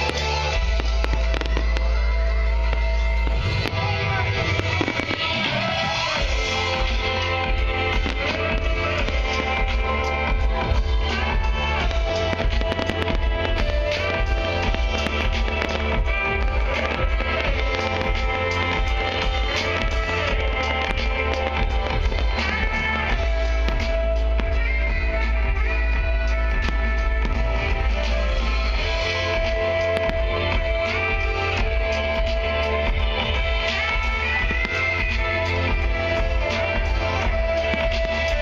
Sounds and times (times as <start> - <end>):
Happy music: 0.0 - 38.4
New-age music: 0.0 - 38.4.